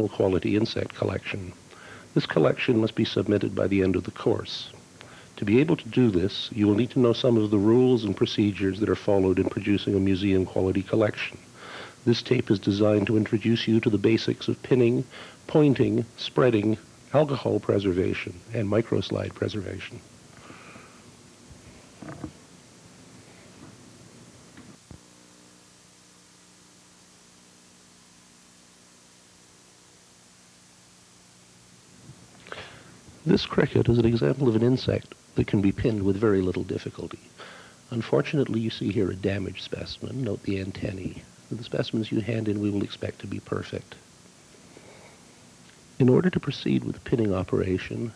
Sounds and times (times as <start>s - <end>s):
Speech: 0.0s - 4.8s, 5.4s - 20.0s, 33.2s - 44.1s, 46.0s - 48.1s.